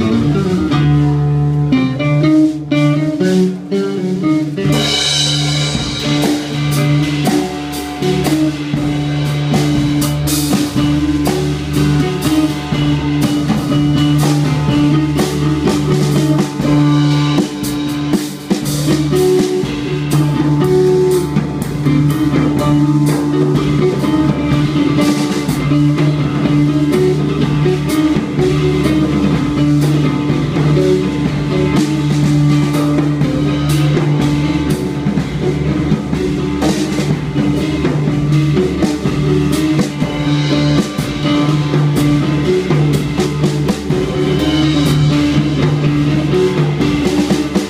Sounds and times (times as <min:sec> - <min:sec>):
Music: 0:00.0 - 0:47.7.